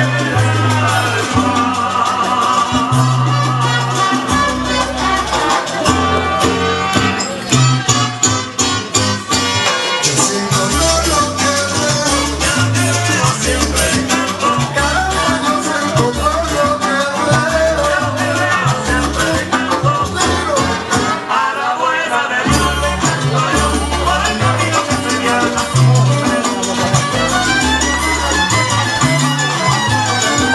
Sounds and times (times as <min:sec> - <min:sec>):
Music: 0:00.0 - 0:30.5.